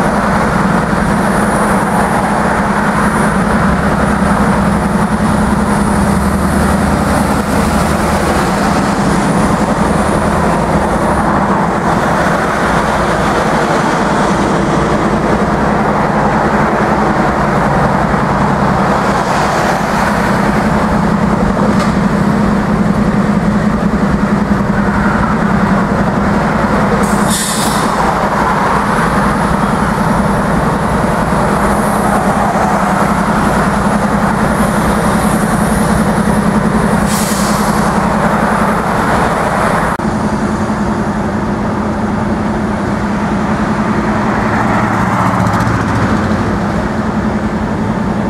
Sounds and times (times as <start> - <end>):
Train: 0.0 - 48.3.